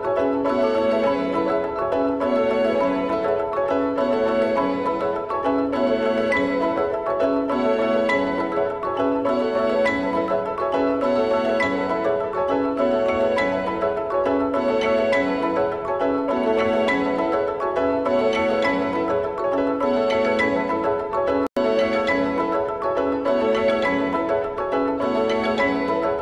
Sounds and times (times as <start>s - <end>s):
Music: 0.0s - 26.2s.